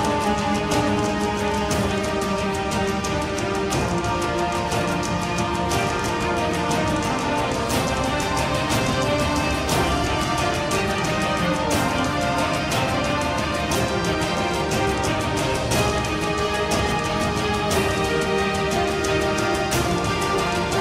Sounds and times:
Music: 0.0 - 20.8.

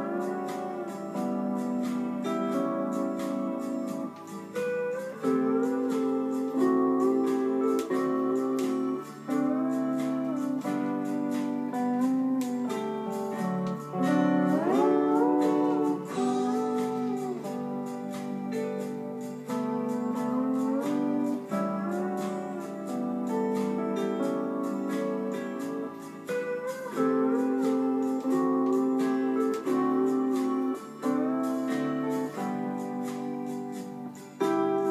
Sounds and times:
Guitar: 0.0 - 34.9.

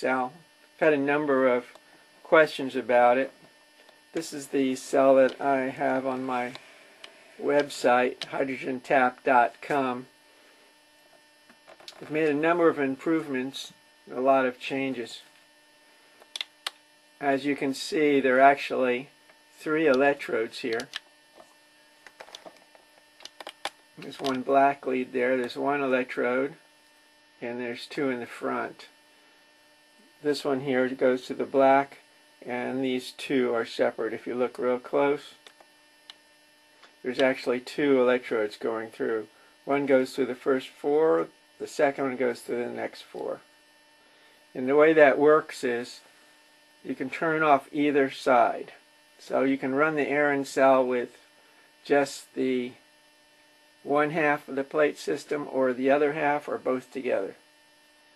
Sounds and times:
Speech: 0.0 - 3.4, 4.2 - 6.6, 7.4 - 10.1, 11.9 - 15.3, 17.2 - 20.9, 24.0 - 26.6, 27.4 - 28.9, 30.2 - 35.4, 37.0 - 43.5, 44.6 - 46.1, 46.8 - 51.2, 51.8 - 52.8, 53.8 - 57.4.

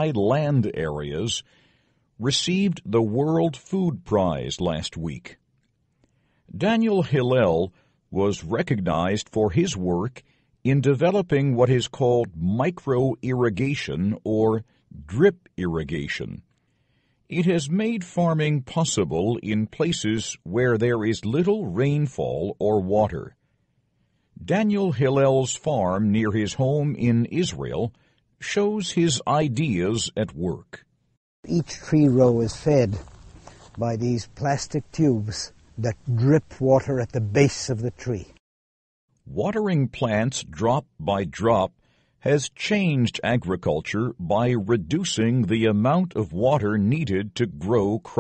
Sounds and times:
Speech: 0.0 - 1.5, 2.2 - 5.4, 6.5 - 16.5, 17.3 - 23.4, 24.4 - 30.8, 31.5 - 38.4, 39.3 - 48.2.

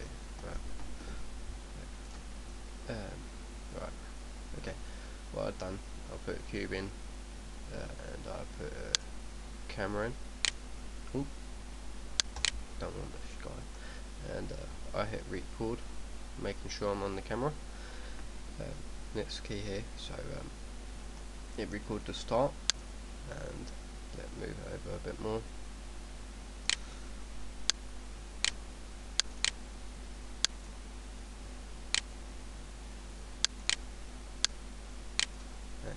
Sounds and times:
Speech: 0.0 - 0.6, 2.9 - 4.8, 5.4 - 7.0, 7.7 - 9.0, 9.7 - 10.2, 11.1 - 11.4, 12.8 - 15.8, 16.4 - 17.6, 18.6 - 20.5, 21.6 - 22.6, 23.3 - 25.5.

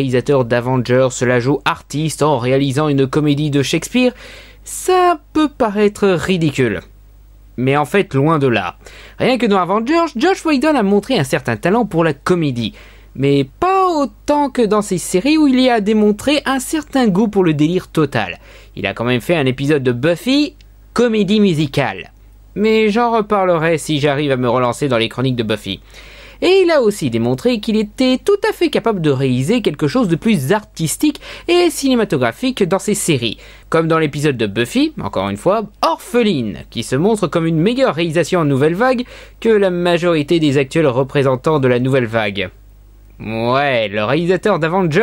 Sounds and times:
Speech: 0.0 - 6.9, 7.6 - 25.8, 26.4 - 42.6, 43.2 - 45.0.

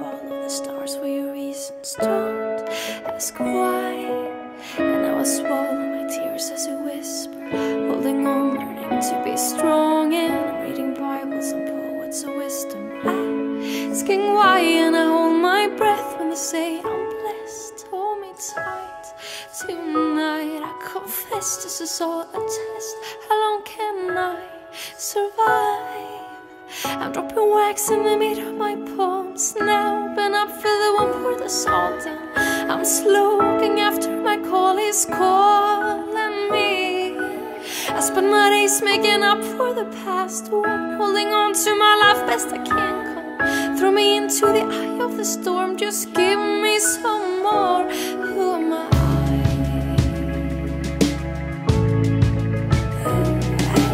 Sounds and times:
Music: 0.0 - 53.9.

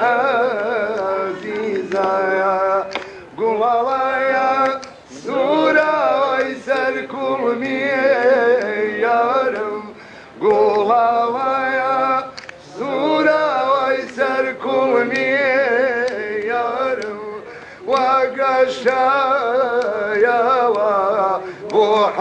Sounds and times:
Chant: 0.0 - 22.2.

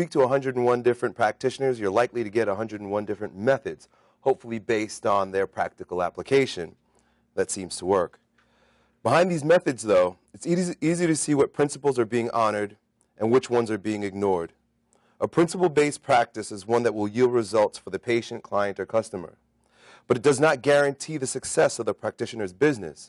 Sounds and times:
Male speech, man speaking: 0.0 - 6.8, 7.4 - 8.2, 9.1 - 14.6, 15.2 - 19.4, 20.1 - 23.0
Narration, monologue: 0.0 - 23.0.

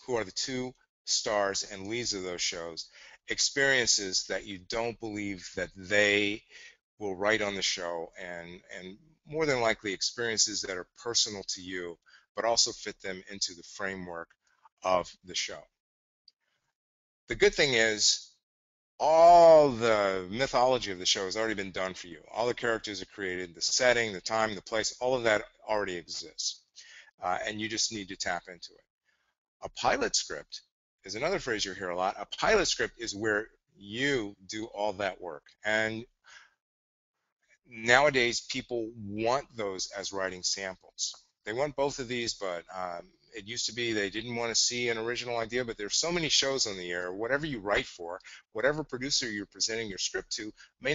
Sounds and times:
Speech: 0.0 - 15.7, 17.3 - 18.4, 19.0 - 28.7, 29.6 - 36.1, 37.7 - 50.9.

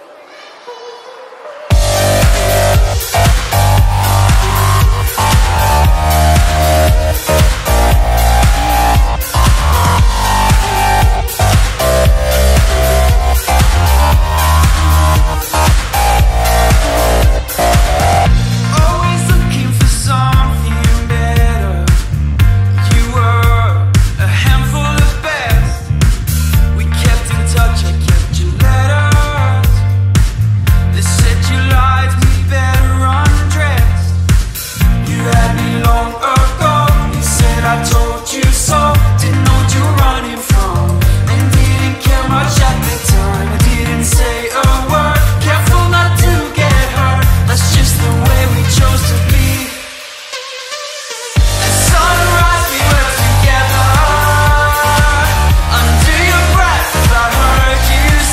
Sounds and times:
Music: 1.7 - 58.3.

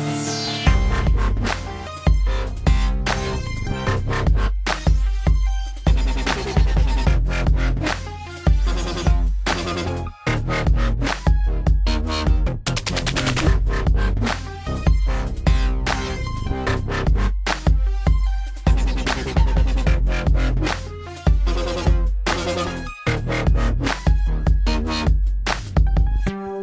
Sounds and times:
Dubstep: 0.0 - 26.1.

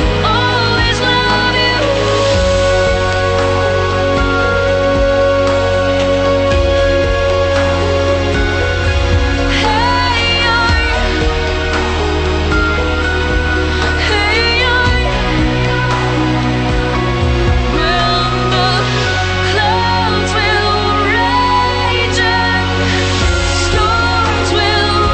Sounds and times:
Background music: 0.0 - 25.1.

